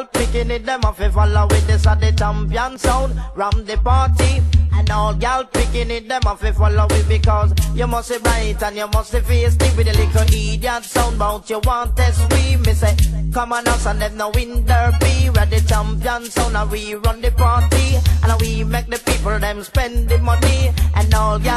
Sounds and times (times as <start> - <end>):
Music: 0.0 - 21.5.